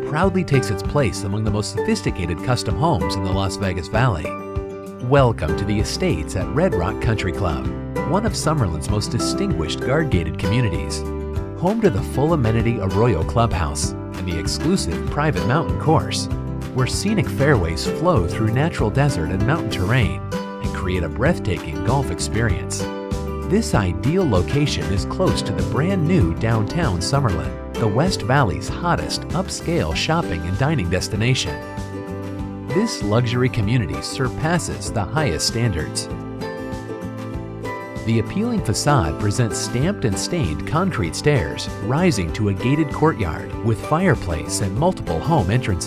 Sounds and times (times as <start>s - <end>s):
Speech: 0.0s - 4.4s, 5.0s - 22.9s, 23.5s - 31.6s, 32.7s - 36.2s, 38.0s - 45.8s
Country: 0.0s - 45.8s.